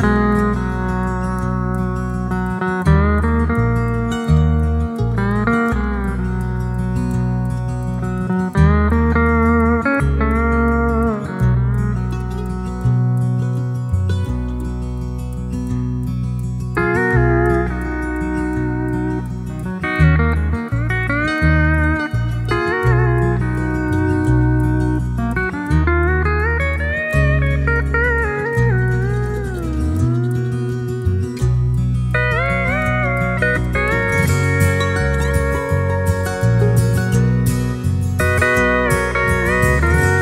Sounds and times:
Guitar: 0:00.0 - 0:40.2.

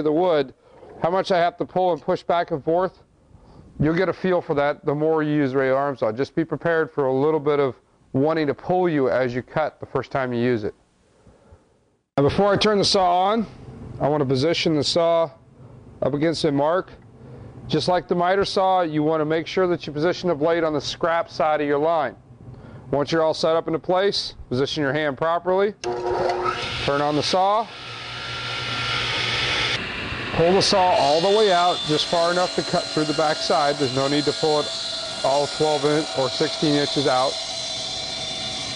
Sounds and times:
Speech: 0:00.0 - 0:03.0, 0:03.8 - 0:10.8, 0:12.2 - 0:15.4, 0:16.0 - 0:17.0, 0:17.7 - 0:22.2, 0:22.9 - 0:25.8, 0:26.9 - 0:27.7, 0:30.4 - 0:37.4.

